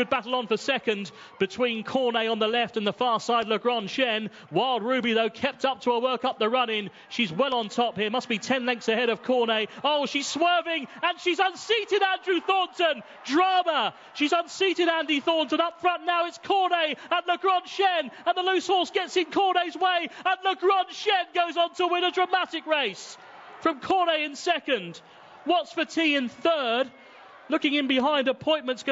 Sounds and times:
Speech: 0:00.0 - 0:26.9, 0:27.5 - 0:28.9.

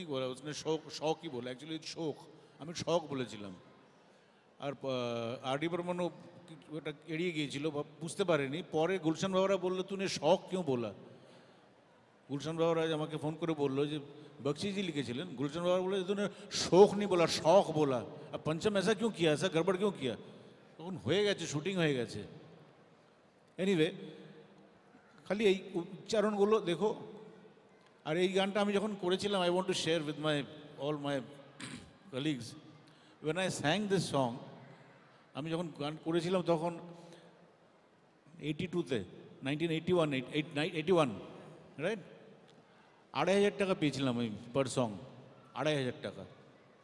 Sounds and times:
Speech: 0:00.0 - 0:03.6, 0:04.6 - 0:11.0, 0:12.3 - 0:20.2, 0:20.8 - 0:22.3, 0:23.6 - 0:24.1, 0:25.2 - 0:27.1, 0:28.0 - 0:31.3, 0:32.1 - 0:32.6, 0:33.2 - 0:34.5, 0:35.3 - 0:36.8, 0:38.4 - 0:41.2, 0:41.8 - 0:42.1, 0:43.2 - 0:45.0, 0:45.6 - 0:46.4.

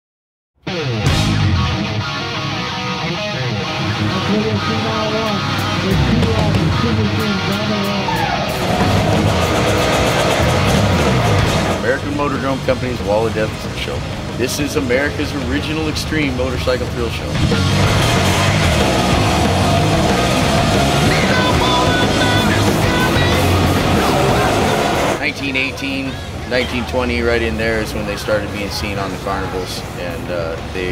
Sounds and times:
Music: 0:00.6 - 0:26.9
Outside, urban or manmade: 0:00.6 - 0:30.9
Speech: 0:04.1 - 0:08.2, 0:11.8 - 0:17.4, 0:23.9 - 0:30.9.

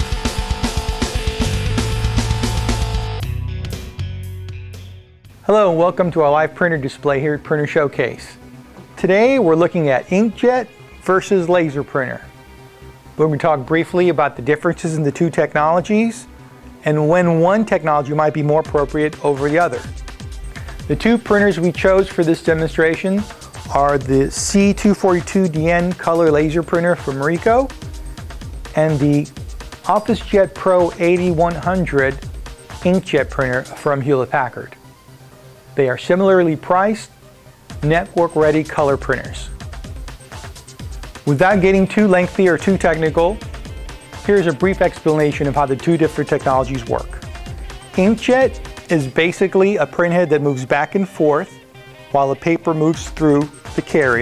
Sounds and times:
Music: 0:00.0 - 0:54.2
Speech: 0:05.5 - 0:08.4, 0:09.0 - 0:12.3, 0:13.2 - 0:19.9, 0:20.9 - 0:27.7, 0:28.8 - 0:29.3, 0:29.9 - 0:32.2, 0:32.8 - 0:34.8, 0:35.8 - 0:37.1, 0:37.8 - 0:39.6, 0:41.3 - 0:43.4, 0:44.3 - 0:47.2, 0:48.0 - 0:54.2.

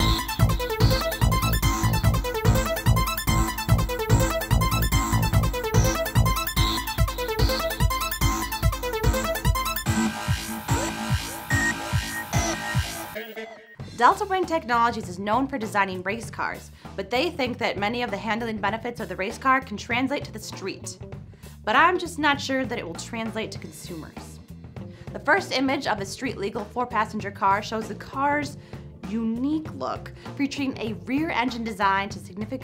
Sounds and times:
Speech: 0:14.0 - 0:21.0, 0:21.6 - 0:24.4, 0:25.1 - 0:32.6.

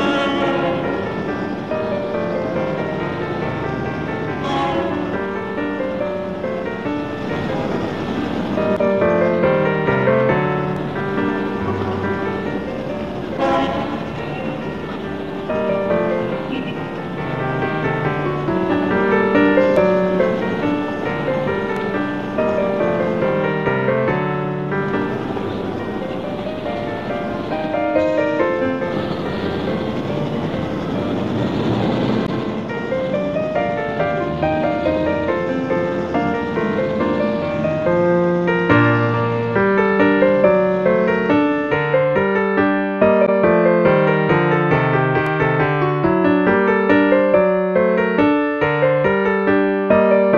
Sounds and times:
Music: 0:00.0 - 0:50.3.

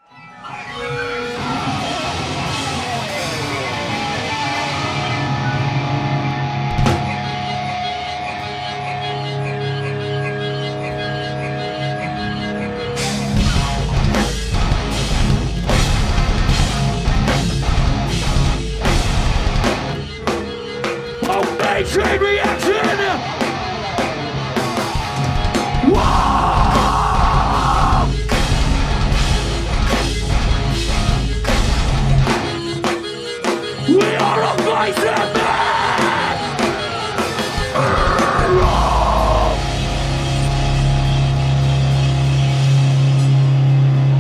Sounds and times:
Rock music: 0:00.2 - 0:44.2.

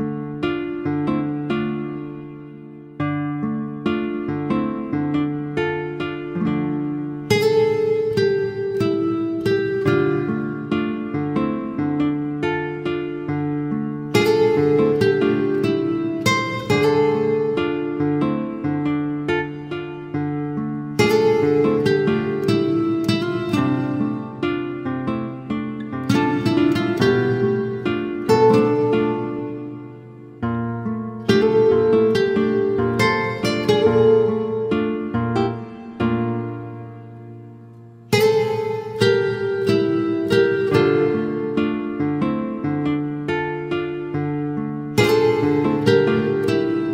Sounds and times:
Acoustic guitar: 0:00.0 - 0:46.9
Strum: 0:00.0 - 0:46.9.

